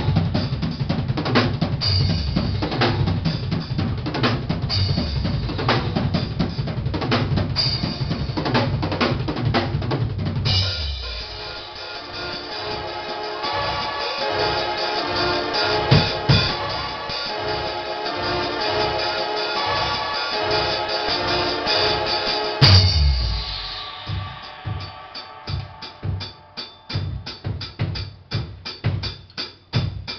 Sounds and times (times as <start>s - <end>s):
Bass drum: 0.0s - 11.4s, 22.6s - 30.1s
Drum kit: 0.0s - 30.1s.